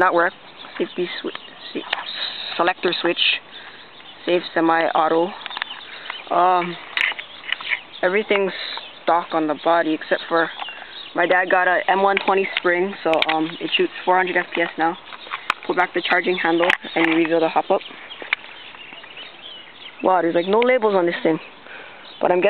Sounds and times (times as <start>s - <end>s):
Speech: 0.0s - 3.4s, 4.3s - 5.4s, 6.3s - 6.8s, 8.0s - 10.6s, 11.2s - 15.0s, 15.7s - 17.9s, 20.0s - 21.5s, 22.2s - 22.4s
Outside, rural or natural: 0.0s - 22.4s.